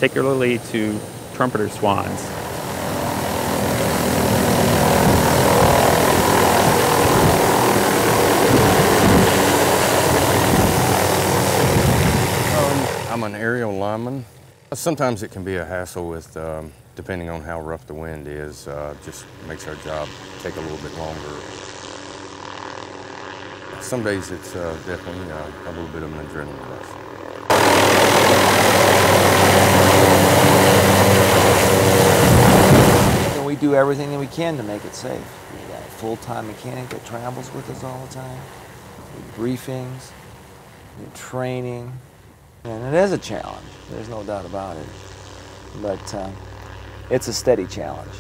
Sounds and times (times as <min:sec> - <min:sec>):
Speech: 0:00.0 - 0:02.3, 0:12.6 - 0:21.5, 0:23.8 - 0:27.0, 0:33.4 - 0:38.5, 0:39.3 - 0:40.2, 0:41.0 - 0:42.0, 0:42.7 - 0:44.9, 0:45.8 - 0:46.4, 0:47.1 - 0:48.2
Helicopter: 0:00.0 - 0:13.4, 0:14.3 - 0:14.7, 0:19.0 - 0:48.2.